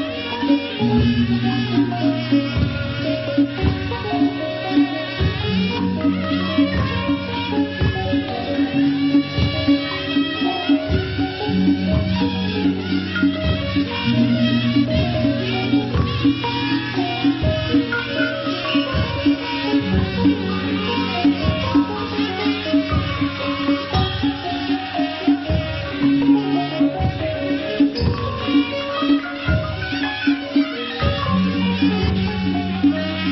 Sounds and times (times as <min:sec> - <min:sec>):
Music: 0:00.0 - 0:33.3.